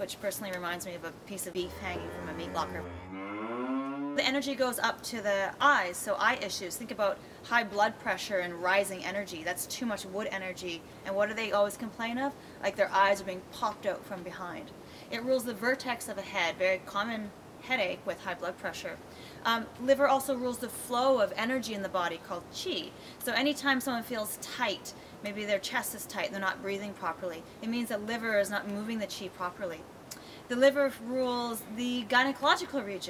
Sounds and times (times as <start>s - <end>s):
Speech: 0.0s - 2.9s, 4.2s - 29.8s, 30.5s - 33.1s.